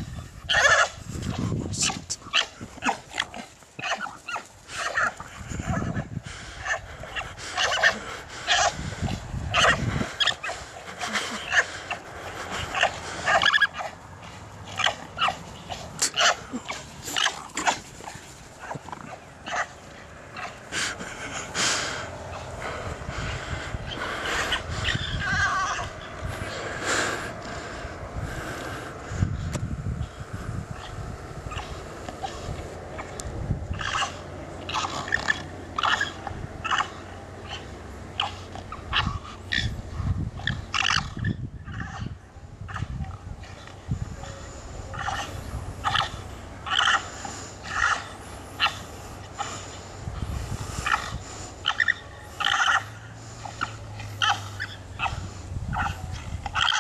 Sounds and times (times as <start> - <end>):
Animal: 0.0 - 21.5, 22.3 - 26.7, 30.7 - 56.8.